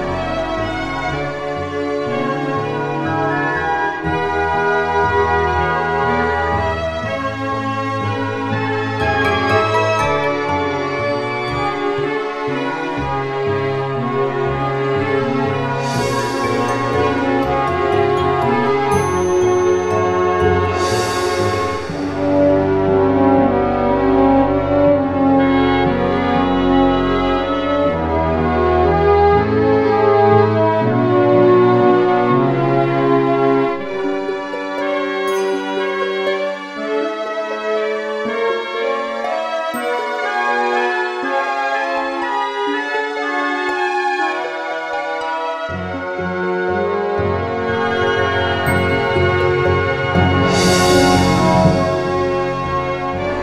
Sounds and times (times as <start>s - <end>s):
Theme music: 0.0s - 29.0s, 34.0s - 37.6s, 39.8s - 42.2s, 45.1s - 53.4s.